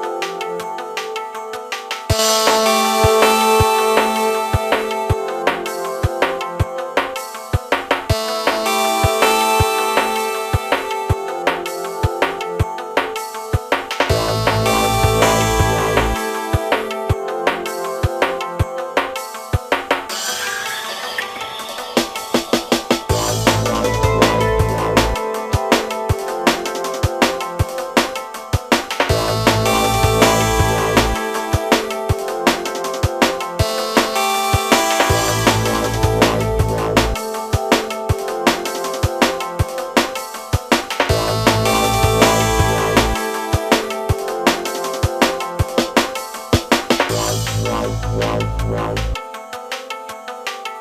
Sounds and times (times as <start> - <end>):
Music: 0.0 - 50.8.